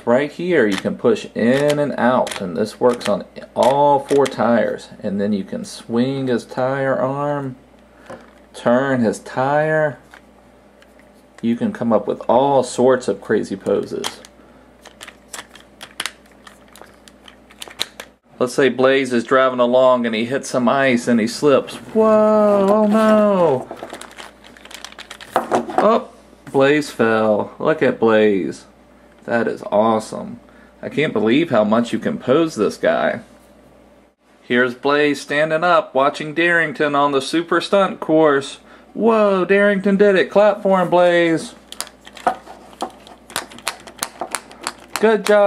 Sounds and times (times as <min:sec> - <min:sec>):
Speech: 0:00.0 - 0:07.6, 0:08.6 - 0:10.0, 0:11.4 - 0:14.3, 0:18.4 - 0:23.7, 0:25.8 - 0:33.3, 0:34.4 - 0:41.6, 0:45.0 - 0:45.4.